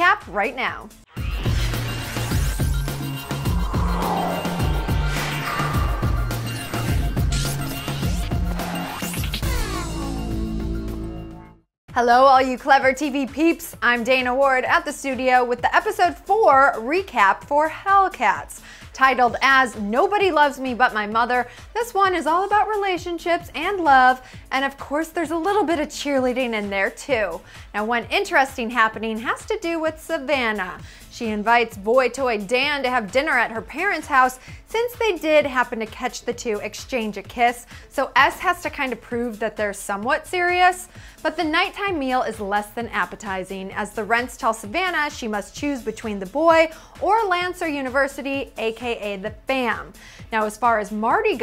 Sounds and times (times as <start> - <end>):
Speech: 0.0 - 0.9, 11.9 - 51.4
Music: 0.0 - 51.4.